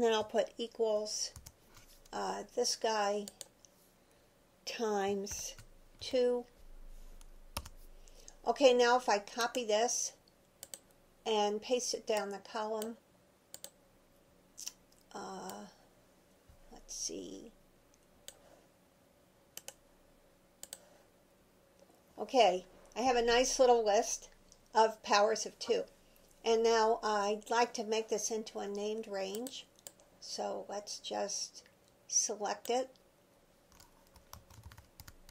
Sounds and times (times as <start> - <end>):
Speech: 0.0 - 1.4, 2.2 - 3.4, 4.7 - 6.5, 8.4 - 10.2, 11.3 - 13.0, 14.6 - 15.8, 16.7 - 17.6, 22.2 - 33.0
Computer keyboard: 1.3 - 1.6, 7.6 - 7.8, 10.6 - 10.8, 13.5 - 13.8, 20.6 - 20.8, 33.7 - 35.3.